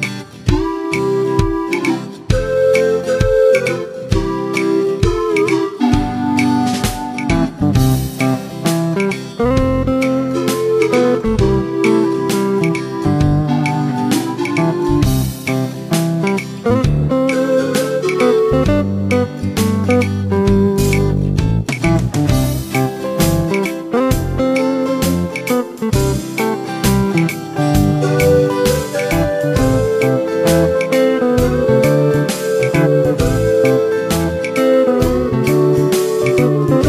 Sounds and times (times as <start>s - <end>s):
Music: 0.0s - 36.8s.